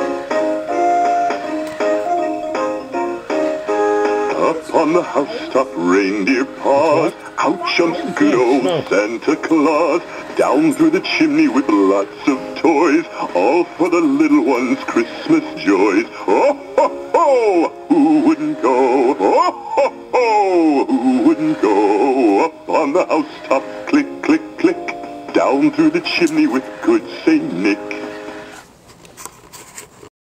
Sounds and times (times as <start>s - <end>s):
Music: 0.0s - 28.9s
Male singing: 4.3s - 28.0s.